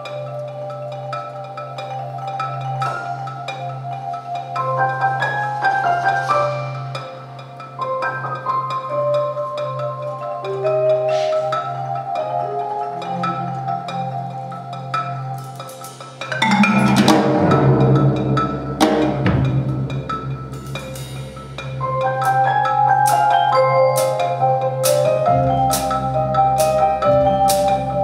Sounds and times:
Tubular bells: 0:00.0 - 0:28.0.

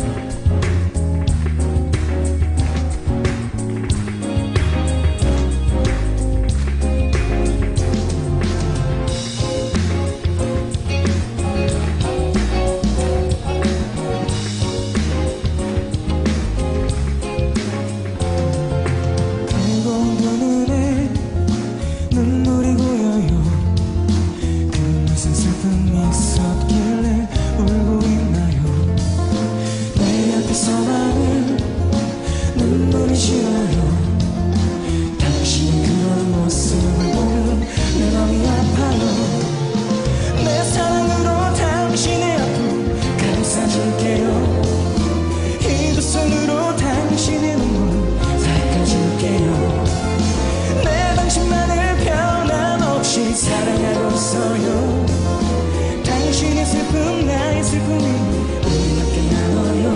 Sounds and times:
Music: 0:00.0 - 0:59.9.

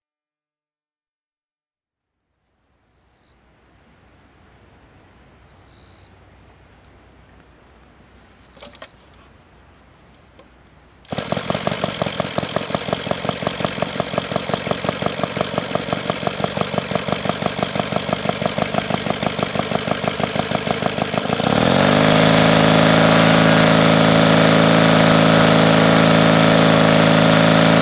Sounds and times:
Idling: 0:11.1 - 0:27.8
Medium engine (mid frequency): 0:11.1 - 0:27.8
Accelerating, revving, vroom: 0:21.4 - 0:27.8.

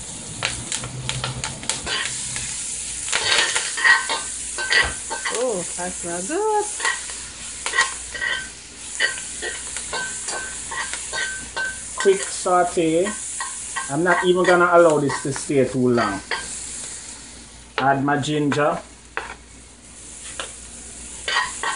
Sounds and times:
Frying (food): 0:00.0 - 0:21.7
Sizzle: 0:00.0 - 0:21.7.

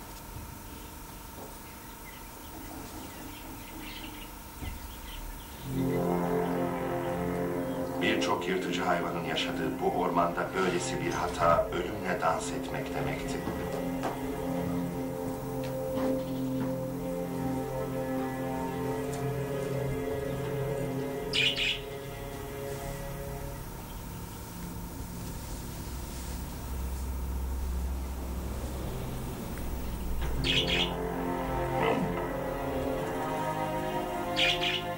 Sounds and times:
Music: 0:03.9 - 0:34.9
Speech: 0:08.0 - 0:13.6.

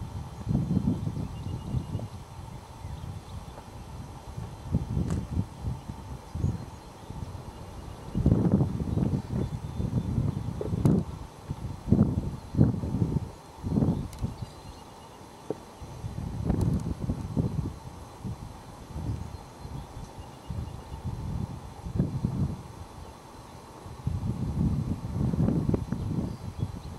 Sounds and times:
Outside, rural or natural: 0:00.0 - 0:26.9.

